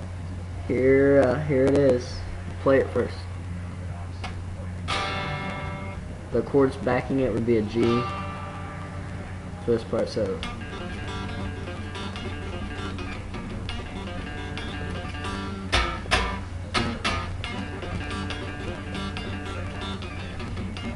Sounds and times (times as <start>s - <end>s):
Guitar: 0.0s - 20.9s.